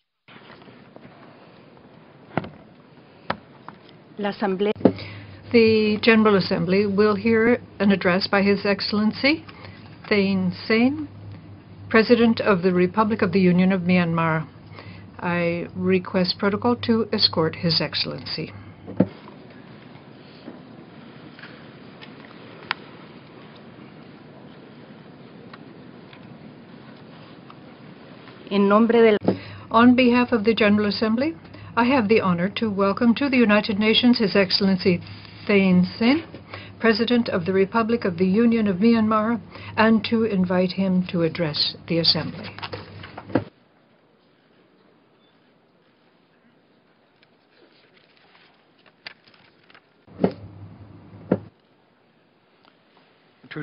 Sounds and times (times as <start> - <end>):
Narration, monologue: 2.6 - 23.4, 28.1 - 43.5
Female speech, woman speaking: 4.2 - 4.8, 5.5 - 11.2, 11.9 - 14.5, 15.2 - 18.6, 28.5 - 42.6.